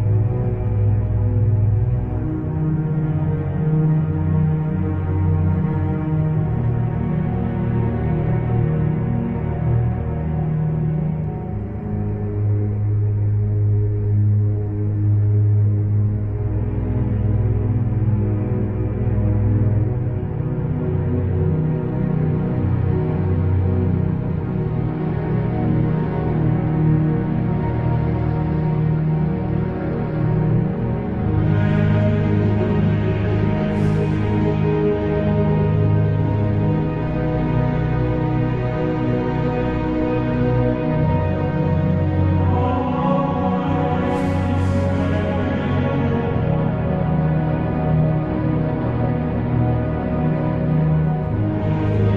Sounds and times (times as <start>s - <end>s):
Music: 0.0s - 52.1s.